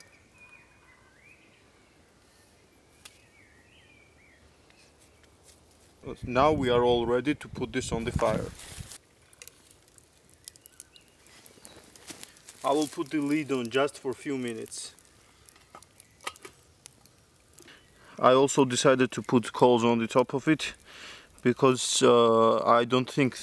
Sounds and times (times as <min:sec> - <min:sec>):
Fire: 0:00.0 - 0:23.4
Outside, rural or natural: 0:00.0 - 0:23.4
Speech: 0:06.0 - 0:08.6, 0:12.6 - 0:15.0, 0:18.2 - 0:20.8, 0:21.4 - 0:23.4.